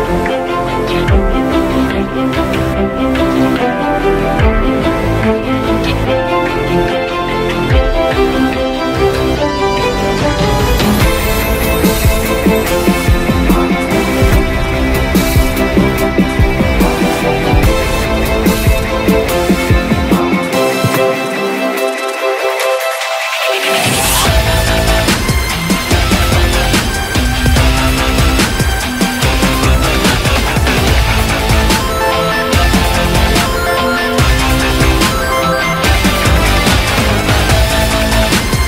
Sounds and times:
Music: 0.0 - 38.6.

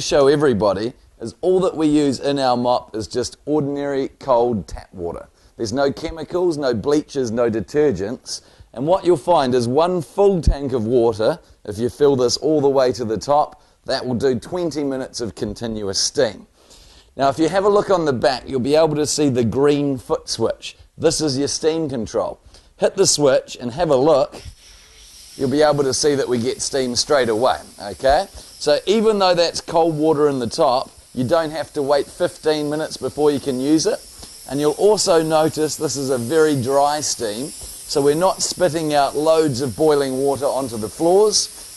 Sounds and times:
Hiss: 24.2 - 41.7.

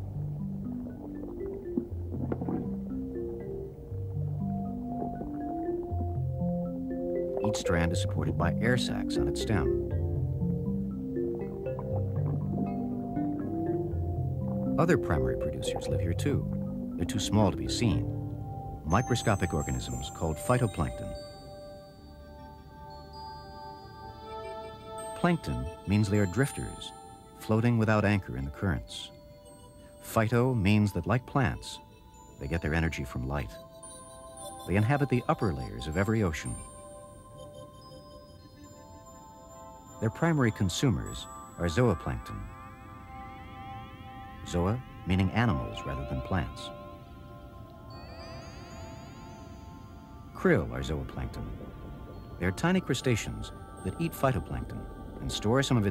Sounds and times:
Music: 0.0 - 55.9
Speech: 7.4 - 9.7, 14.8 - 16.4, 17.0 - 18.1, 18.9 - 21.2, 25.2 - 29.1, 30.0 - 31.8, 32.4 - 33.6, 34.7 - 36.7, 40.0 - 42.5, 44.5 - 46.7, 50.4 - 51.5, 52.4 - 55.9.

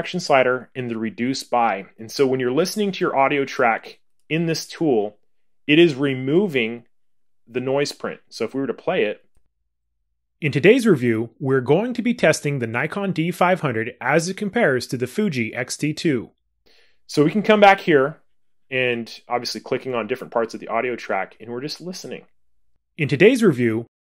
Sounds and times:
Speech: 0.0 - 6.9, 7.5 - 9.3, 10.4 - 16.4, 17.1 - 22.3, 23.0 - 24.0.

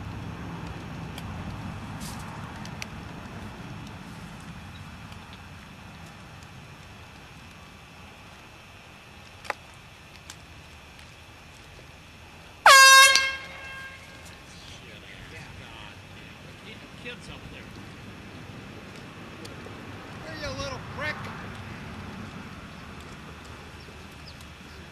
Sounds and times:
Speech: 14.5 - 17.8, 20.2 - 21.3.

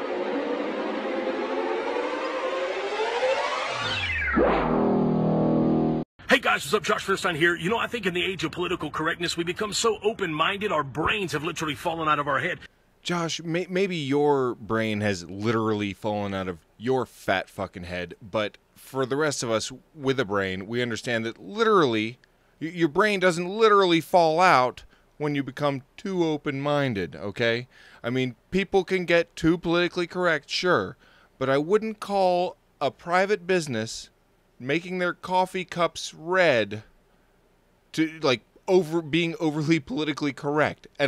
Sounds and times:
Speech: 6.2 - 36.9, 37.9 - 41.0.

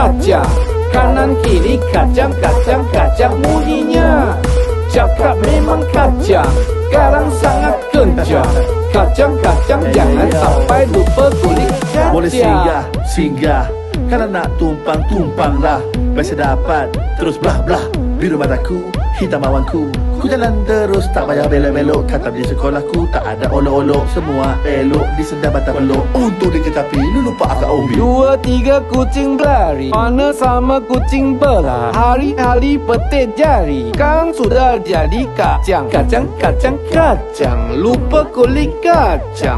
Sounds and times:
Music: 0.0 - 39.5
Speech: 3.2 - 4.4, 9.7 - 39.5.

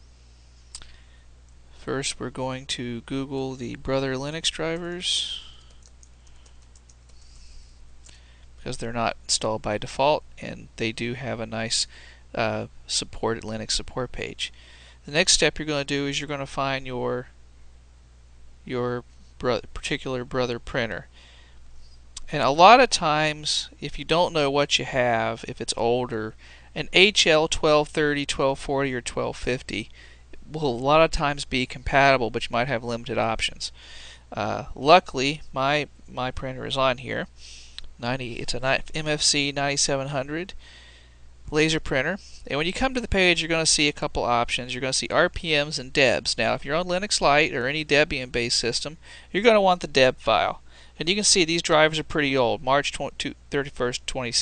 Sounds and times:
Speech: 1.8 - 5.6, 8.6 - 17.4, 18.6 - 21.1, 22.2 - 37.3, 38.0 - 40.6, 41.5 - 54.4.

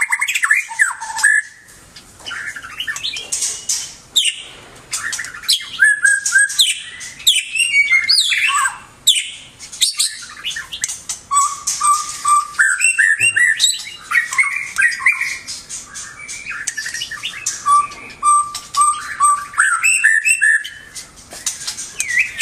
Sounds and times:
Chirp, tweet: 0.0 - 22.4.

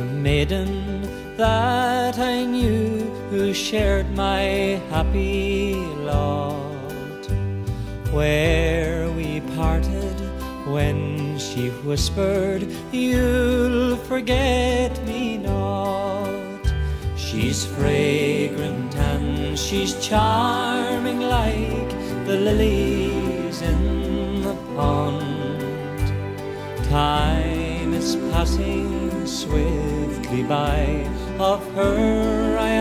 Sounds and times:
Male singing: 0.0 - 7.3, 8.1 - 26.2, 26.8 - 32.8
Music: 0.0 - 32.8.

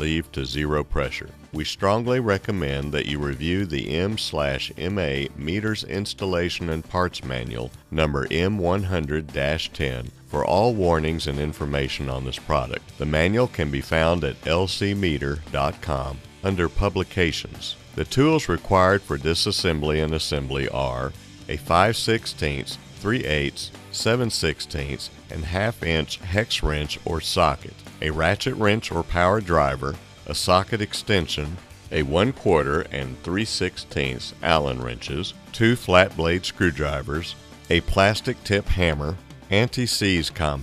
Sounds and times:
Music: 0.0 - 40.6
Speech: 0.0 - 40.6.

